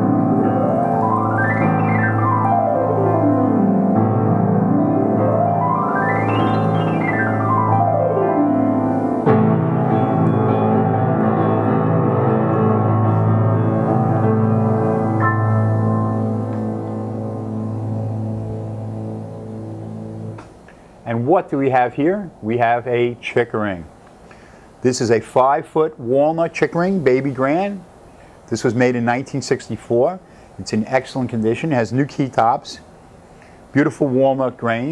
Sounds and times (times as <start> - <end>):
Piano: 0.0 - 23.0.